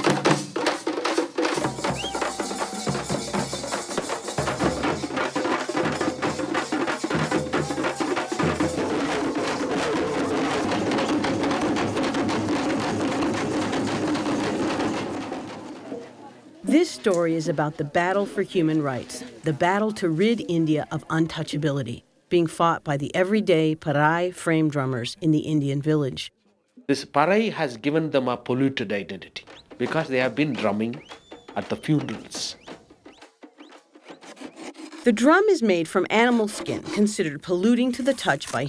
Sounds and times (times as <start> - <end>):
Drum: 0.0 - 16.1, 29.4 - 37.3
Speech: 16.0 - 31.0, 31.6 - 32.6, 35.1 - 38.6.